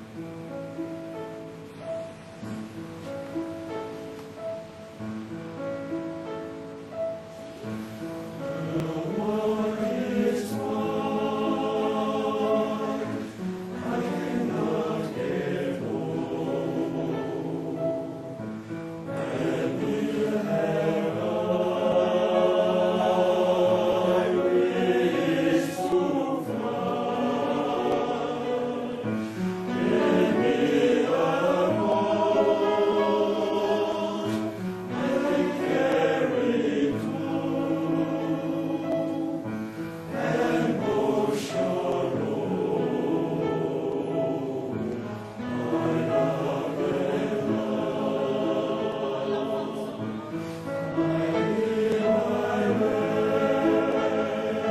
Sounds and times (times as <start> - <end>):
Choir: 7.4 - 54.7.